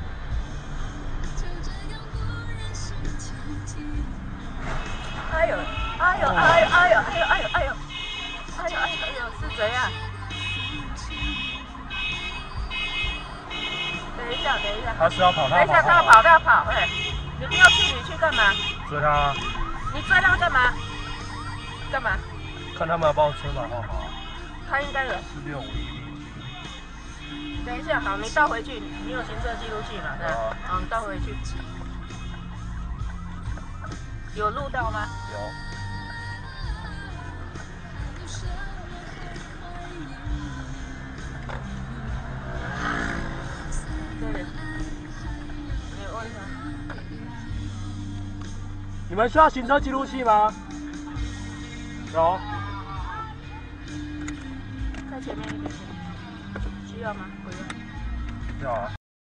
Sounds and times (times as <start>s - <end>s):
Car: 0.0s - 59.0s
Music: 0.0s - 59.0s.